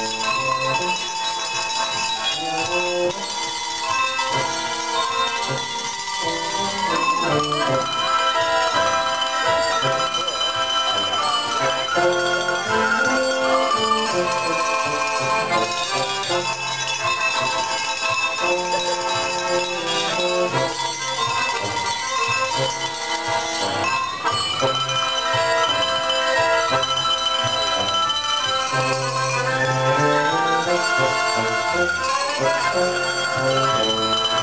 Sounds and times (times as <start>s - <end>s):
Bell: 0.0s - 34.4s
Independent music: 0.0s - 34.4s
Theme music: 0.0s - 34.4s.